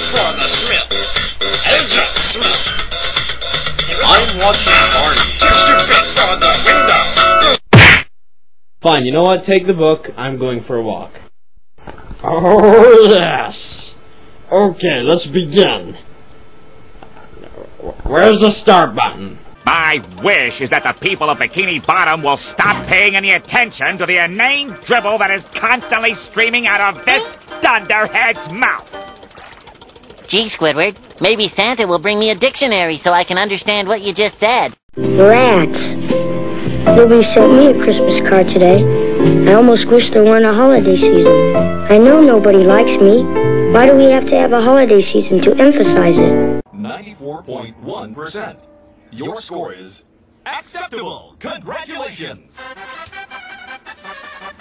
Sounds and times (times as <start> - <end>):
Music: 0.0 - 7.6, 19.9 - 30.2, 35.0 - 46.6, 52.6 - 54.6
Speech: 3.9 - 6.4, 17.9 - 28.8, 30.3 - 35.9, 43.8 - 52.6.